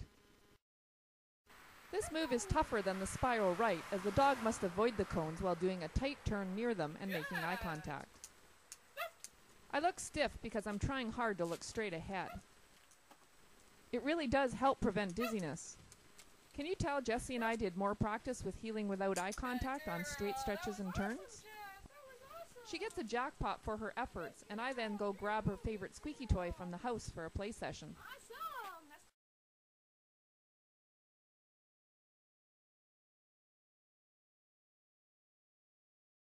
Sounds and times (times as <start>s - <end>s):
Speech: 2.0s - 8.1s, 9.7s - 12.4s, 14.0s - 15.8s, 16.6s - 21.6s, 22.4s - 29.2s.